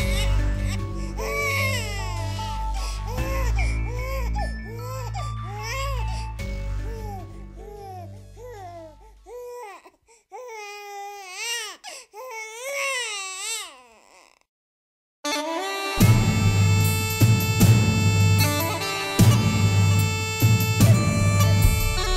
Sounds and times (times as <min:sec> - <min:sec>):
Ambient music: 0:00.0 - 0:09.2, 0:15.3 - 0:22.1.